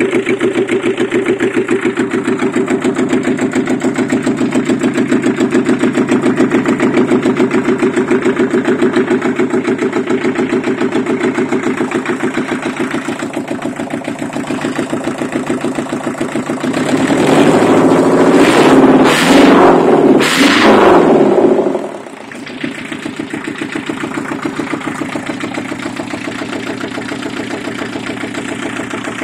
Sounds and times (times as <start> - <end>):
Accelerating, revving, vroom: 16.8 - 21.9.